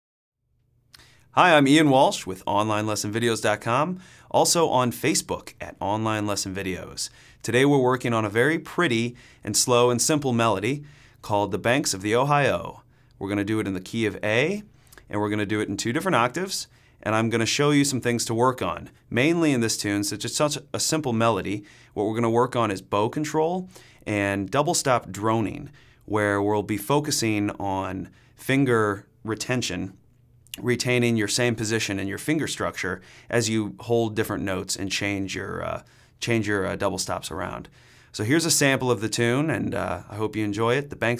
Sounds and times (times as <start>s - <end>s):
Speech: 1.4s - 41.2s.